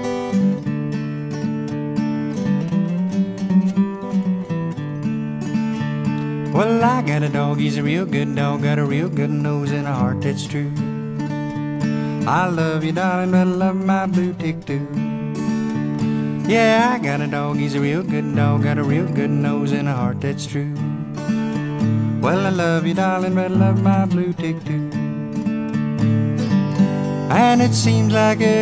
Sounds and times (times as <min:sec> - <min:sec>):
Music: 0:00.0 - 0:28.6.